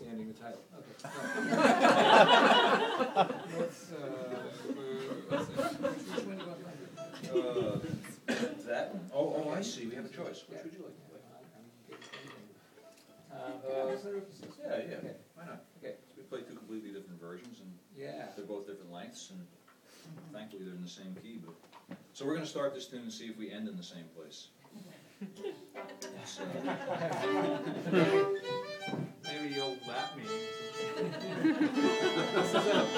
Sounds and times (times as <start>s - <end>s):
Speech: 0.0s - 1.0s, 3.5s - 12.6s, 13.3s - 19.5s, 20.3s - 21.6s, 22.2s - 24.6s, 29.3s - 30.3s.